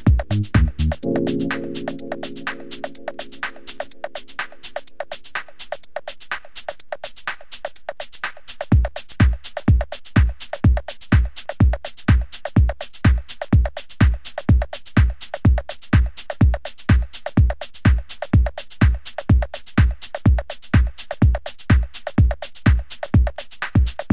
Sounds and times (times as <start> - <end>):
Techno: 0.0 - 5.8, 16.4 - 24.1
Drum machine: 0.0 - 24.1.